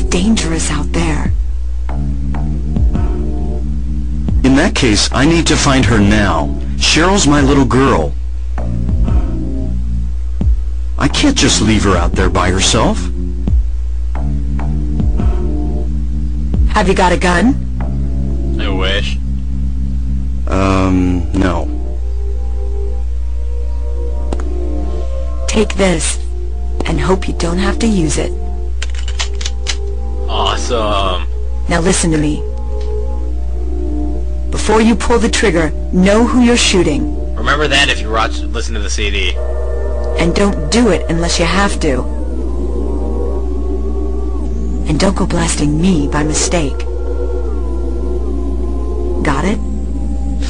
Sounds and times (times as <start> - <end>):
Music: 0.0 - 50.4
Speech: 4.4 - 8.2, 30.3 - 32.4, 34.6 - 39.4.